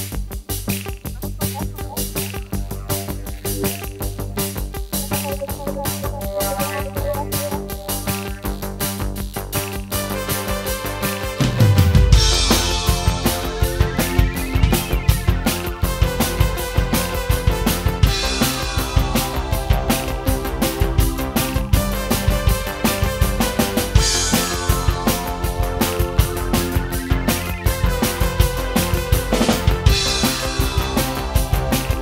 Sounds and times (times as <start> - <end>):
Drum kit: 0.0 - 32.0.